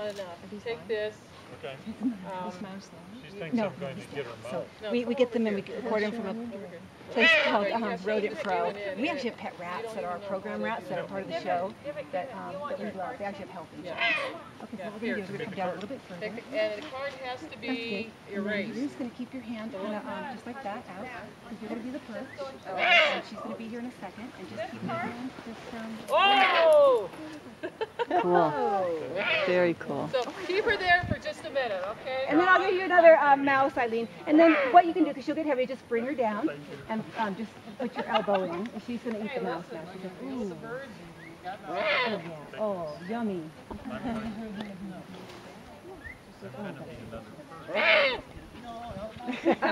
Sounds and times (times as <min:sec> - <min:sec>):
Owl: 0:07.1 - 0:07.7, 0:13.9 - 0:14.5, 0:22.7 - 0:23.3, 0:29.2 - 0:29.6, 0:34.3 - 0:34.9, 0:41.2 - 0:42.3, 0:47.7 - 0:48.3.